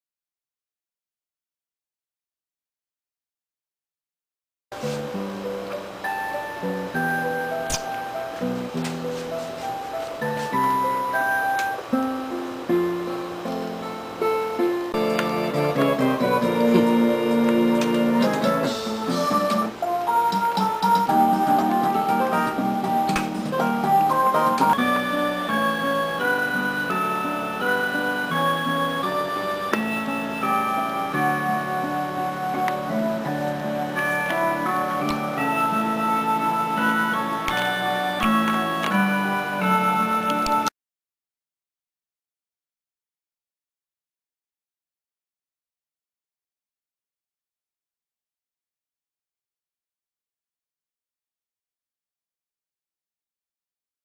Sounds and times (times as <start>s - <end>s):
Music: 4.8s - 40.8s.